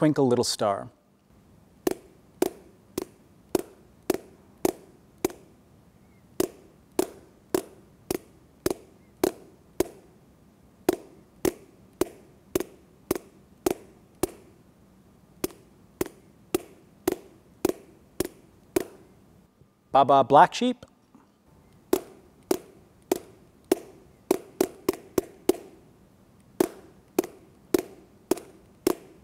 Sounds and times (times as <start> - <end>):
Tap: 10.9 - 14.4, 26.6 - 29.1.